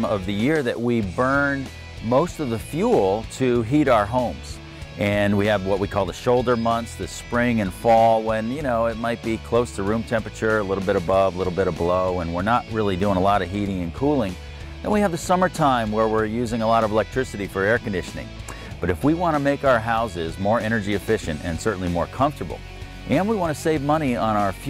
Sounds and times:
Music: 0:00.0 - 0:24.7
Speech: 0:00.0 - 0:24.7.

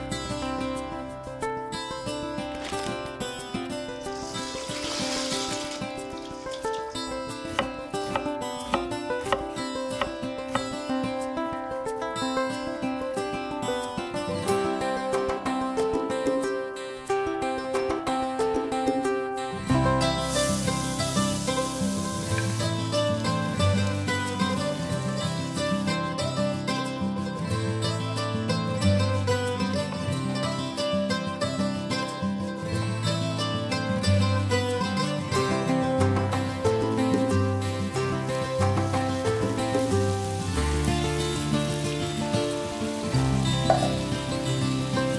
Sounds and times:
Music: 0:00.0 - 0:45.1.

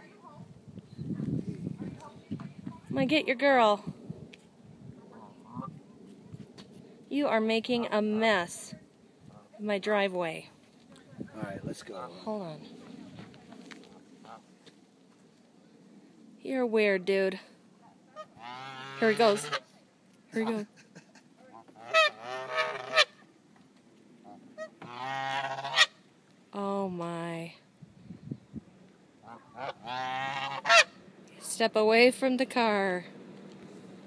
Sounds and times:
Honk: 0:14.2 - 0:14.4, 0:18.2 - 0:19.7, 0:21.5 - 0:23.2, 0:24.2 - 0:26.0, 0:29.2 - 0:31.0.

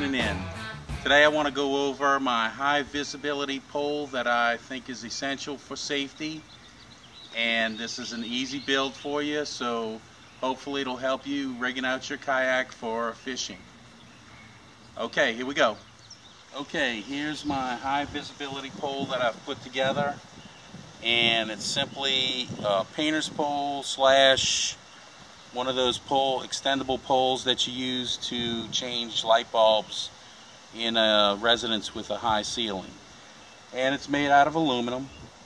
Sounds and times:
Speech: 0:00.0 - 0:06.5, 0:07.3 - 0:13.6, 0:15.0 - 0:15.8, 0:16.5 - 0:20.2, 0:21.0 - 0:24.8, 0:25.5 - 0:33.0, 0:33.7 - 0:35.2.

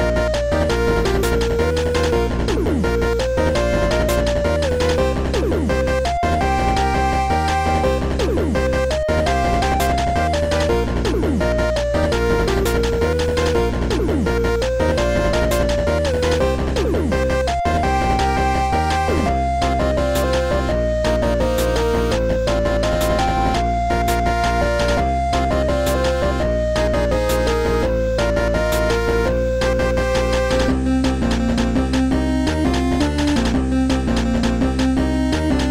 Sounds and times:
Music: 0:00.0 - 0:35.7.

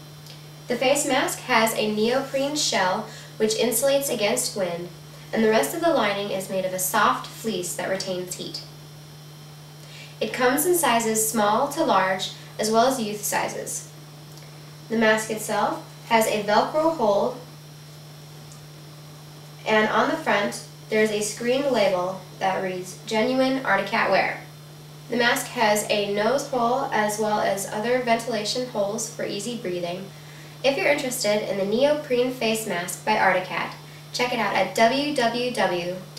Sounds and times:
Speech: 0:00.7 - 0:08.7, 0:10.2 - 0:13.9, 0:14.9 - 0:17.4, 0:19.6 - 0:24.5, 0:25.1 - 0:36.1.

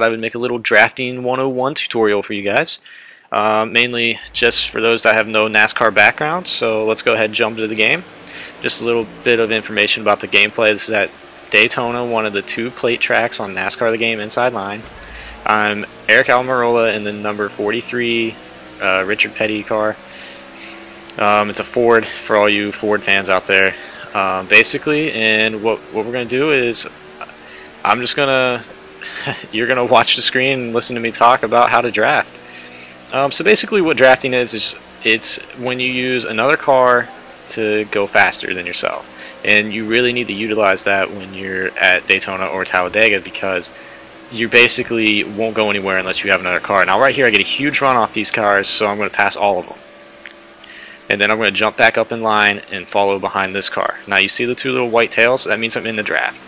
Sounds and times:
Speech: 0:00.0 - 0:49.8, 0:50.7 - 0:56.4.

